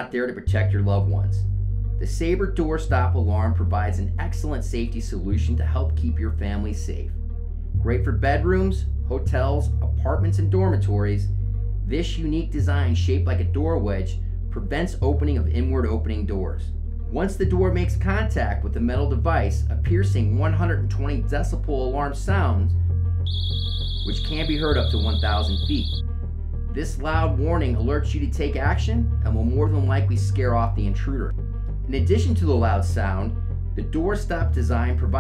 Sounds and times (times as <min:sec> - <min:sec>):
Speech: 0:00.0 - 0:07.1, 0:07.8 - 0:11.3, 0:11.9 - 0:22.8, 0:24.1 - 0:26.0, 0:26.7 - 0:35.2
Music: 0:00.0 - 0:35.2.